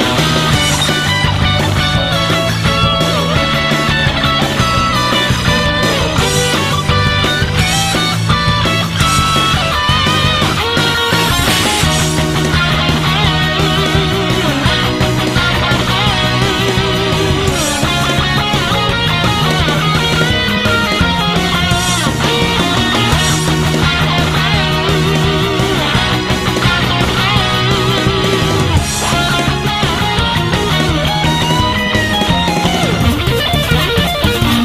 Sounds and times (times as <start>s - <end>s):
Bass guitar: 0.0s - 34.6s
Electric guitar: 0.0s - 34.6s.